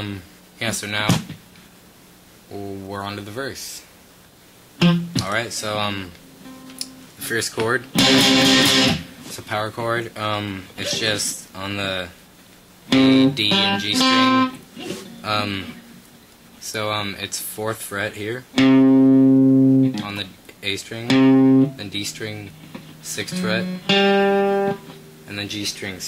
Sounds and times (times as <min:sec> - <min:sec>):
Speech: 0:00.0 - 0:01.3, 0:02.5 - 0:03.9, 0:05.2 - 0:06.2, 0:07.2 - 0:07.9, 0:09.3 - 0:12.2, 0:13.0 - 0:14.1, 0:15.2 - 0:15.8, 0:16.6 - 0:18.5, 0:20.0 - 0:23.7, 0:25.3 - 0:26.0
Strum: 0:05.9 - 0:09.4, 0:12.9 - 0:16.0, 0:21.0 - 0:26.0
Electric guitar: 0:06.1 - 0:09.4, 0:12.9 - 0:16.2, 0:18.5 - 0:20.3, 0:21.0 - 0:26.0.